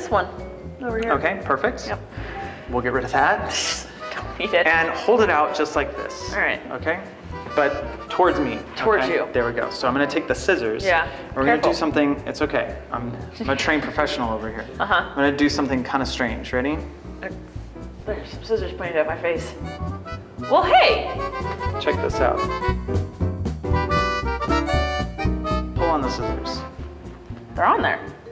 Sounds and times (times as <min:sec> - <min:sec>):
Music: 0:00.0 - 0:28.3.